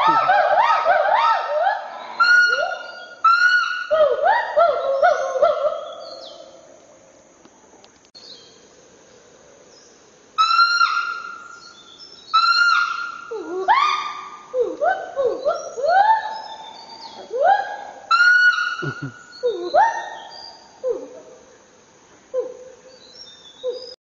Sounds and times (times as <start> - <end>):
Chirp, tweet: 8.2 - 8.6, 22.9 - 24.0.